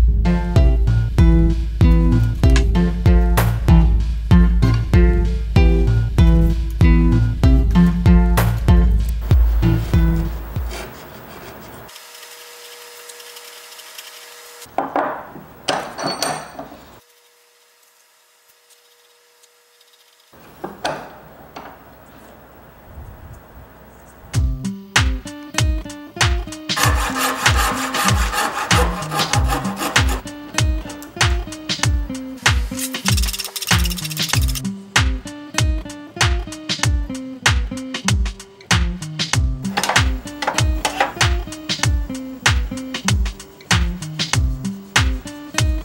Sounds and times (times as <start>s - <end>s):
Rub: 9.7s - 14.6s, 17.0s - 20.3s, 26.8s - 30.2s
Wood: 14.7s - 17.0s, 20.4s - 21.8s, 26.8s - 30.2s.